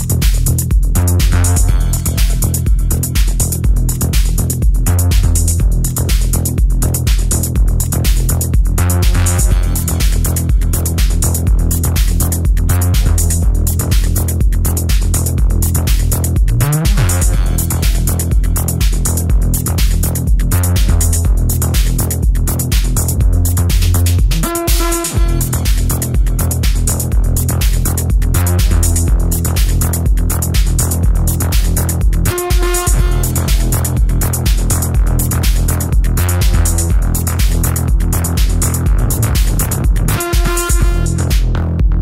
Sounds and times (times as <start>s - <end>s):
Drum machine: 0.0s - 42.0s.